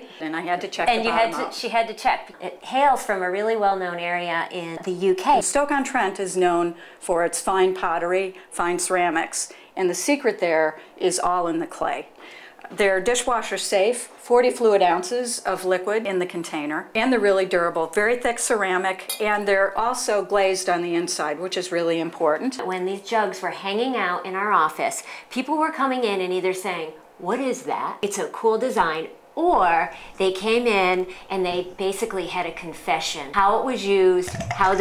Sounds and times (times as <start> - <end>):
Speech: 0.0 - 34.8.